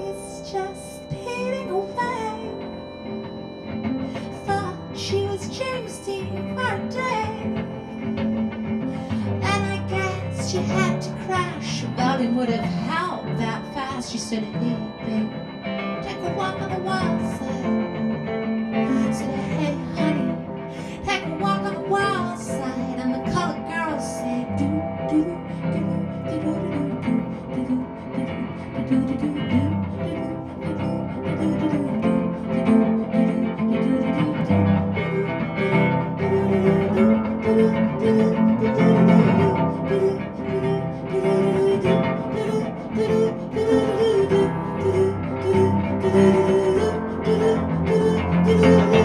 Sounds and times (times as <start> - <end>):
Music: 0.0 - 49.0.